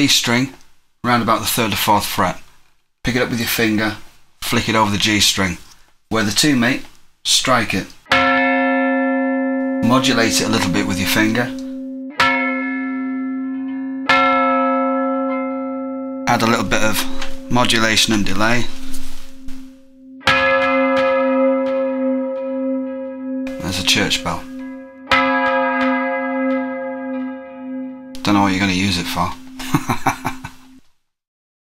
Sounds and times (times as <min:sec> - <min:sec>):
Speech: 0:00.0 - 0:02.4, 0:03.0 - 0:08.0, 0:09.8 - 0:11.6, 0:16.3 - 0:18.8, 0:23.6 - 0:24.5, 0:28.2 - 0:29.4.